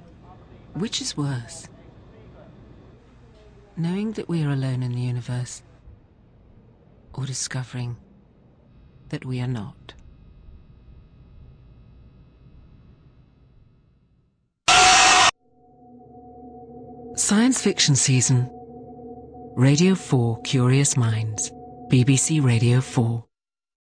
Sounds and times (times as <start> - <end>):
Speech: 0.0 - 5.8, 7.1 - 8.0, 9.1 - 10.0, 17.2 - 18.5, 19.6 - 23.3
Music: 15.6 - 23.2.